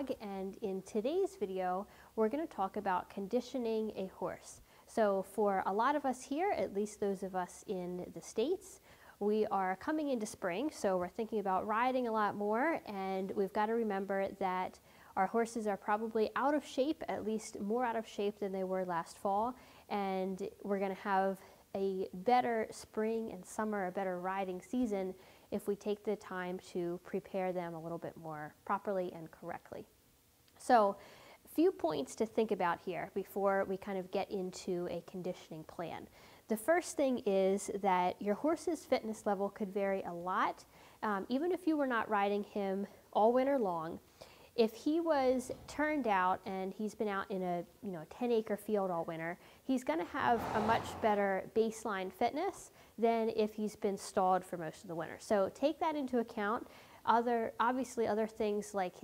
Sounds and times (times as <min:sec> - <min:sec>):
Speech: 0:00.0 - 0:29.9, 0:30.6 - 0:44.0, 0:44.6 - 0:59.0.